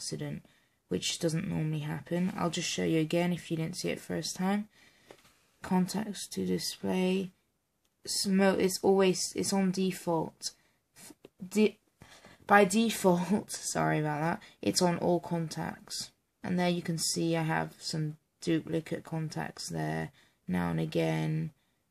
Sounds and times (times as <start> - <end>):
Speech: 0.0 - 4.7, 5.6 - 7.4, 8.1 - 11.8, 12.5 - 21.6
Inside, small room: 0.0 - 21.9.